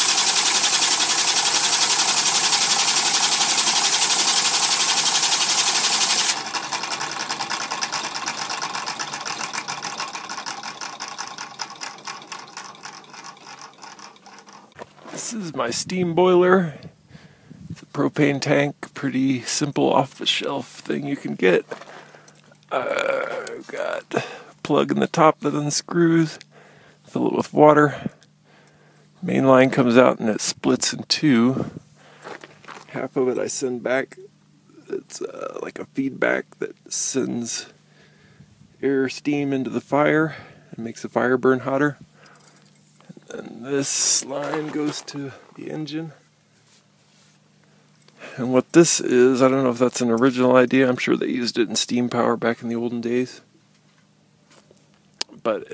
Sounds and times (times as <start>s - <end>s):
Engine: 0.0s - 14.9s, 41.6s - 45.8s
Speech: 15.1s - 16.9s, 17.8s - 21.7s, 22.7s - 26.4s, 27.1s - 28.2s, 29.2s - 31.8s, 32.9s - 37.8s, 38.8s - 42.0s, 43.1s - 46.2s, 48.2s - 53.5s, 55.2s - 55.7s.